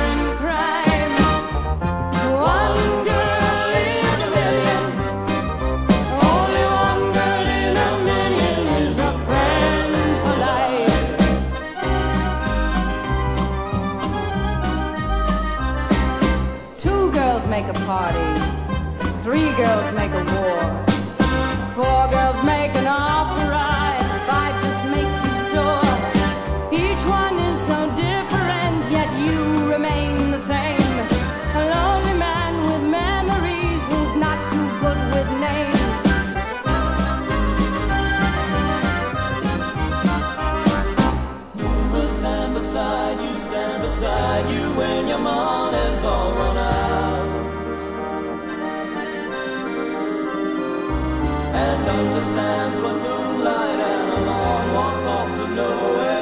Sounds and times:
Music: 0.0 - 56.2
Singing: 6.1 - 11.4, 51.5 - 56.2.

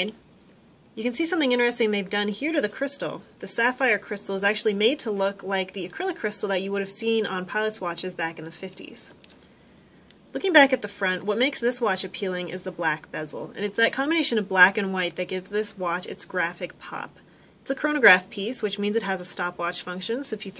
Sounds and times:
Speech: 0.0 - 0.2, 1.0 - 9.2, 10.3 - 20.5.

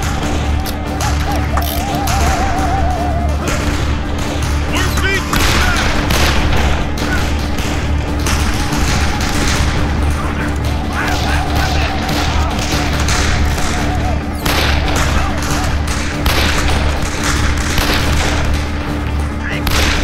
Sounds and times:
Music: 0.0 - 20.0
Speech: 4.7 - 6.0, 19.4 - 19.7.

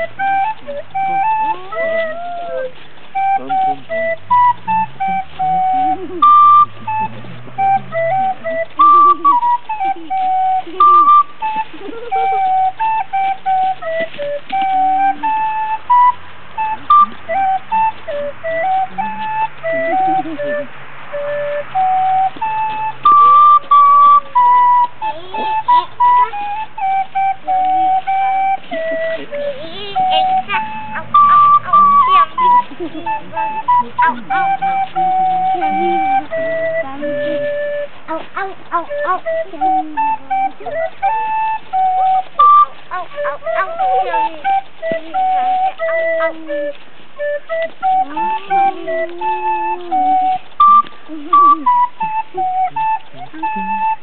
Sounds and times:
Flute: 0.0 - 54.0.

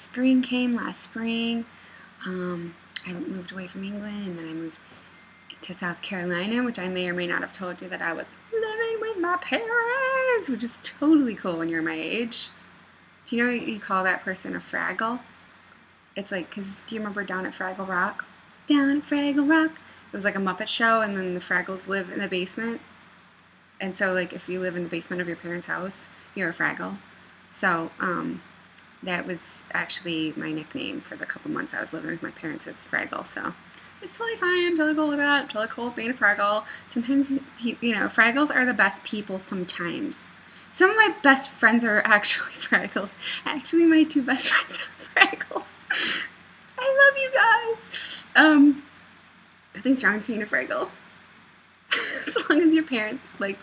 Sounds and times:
Speech: 0.0 - 4.8, 5.5 - 12.6, 13.3 - 15.3, 16.2 - 22.8, 23.8 - 48.9, 49.8 - 51.0, 51.9 - 53.6.

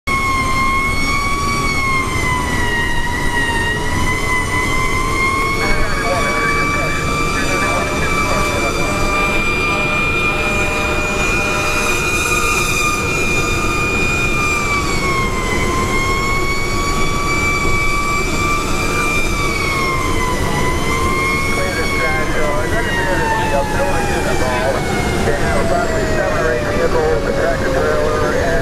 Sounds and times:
Fire engine, fire truck (siren): 0.1 - 28.6.

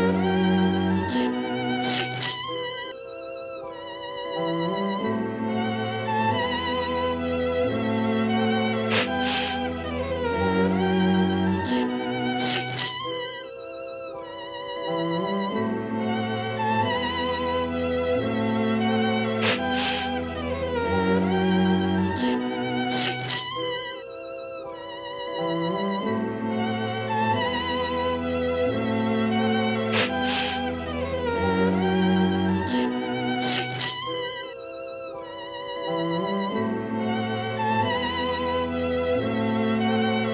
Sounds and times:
Music: 0.0 - 40.3.

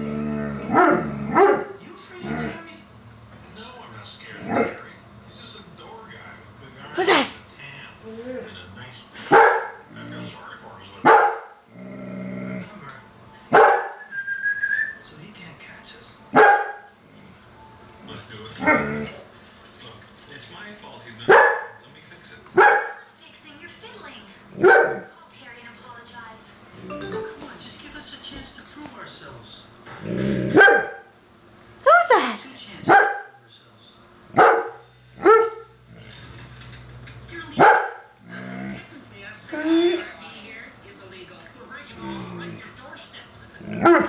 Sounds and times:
Bark: 0.7 - 1.8, 4.5 - 4.8, 9.3 - 9.9, 11.0 - 11.6, 13.5 - 14.0, 16.3 - 16.9, 21.3 - 21.8, 22.6 - 23.0, 24.6 - 25.1, 30.5 - 31.1, 32.9 - 33.4, 34.4 - 35.7, 37.6 - 38.1, 43.8 - 44.0.

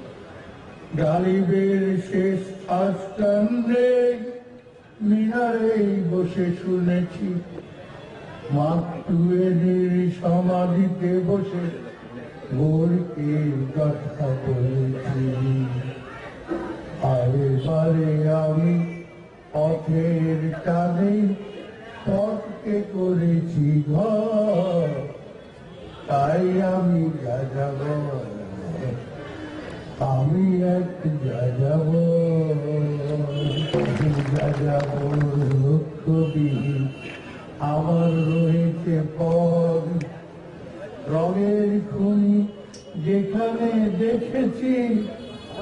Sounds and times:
Male singing: 1.0 - 4.4, 5.0 - 7.5, 8.5 - 11.8, 12.5 - 15.8, 17.0 - 18.9, 19.6 - 21.4, 22.1 - 25.2, 26.1 - 29.0, 30.0 - 36.9, 37.6 - 40.2, 41.1 - 45.1
Speech: 8.4 - 25.2.

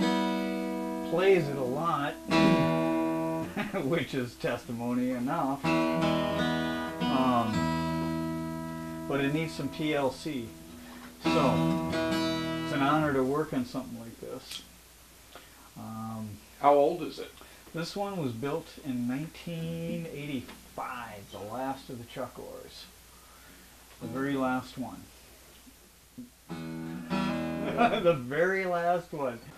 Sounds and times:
Speech: 1.1 - 2.6, 3.6 - 5.7, 7.1 - 7.6, 9.1 - 10.6, 11.2 - 11.8, 12.7 - 14.7, 15.8 - 23.0, 24.0 - 25.1, 27.8 - 29.5.

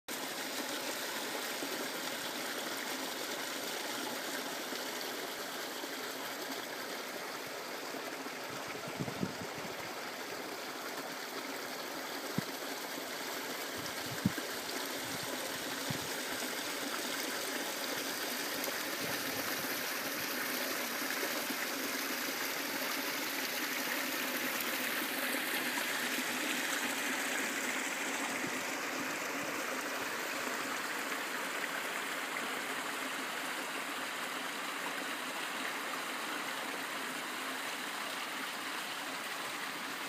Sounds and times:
Stream: 0.1 - 40.0.

